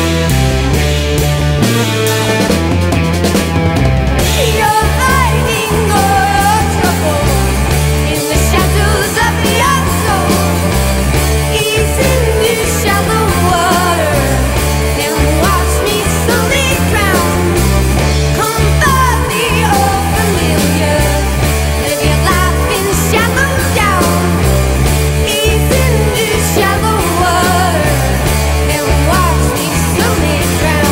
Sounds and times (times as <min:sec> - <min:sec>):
Music: 0:00.0 - 0:30.9.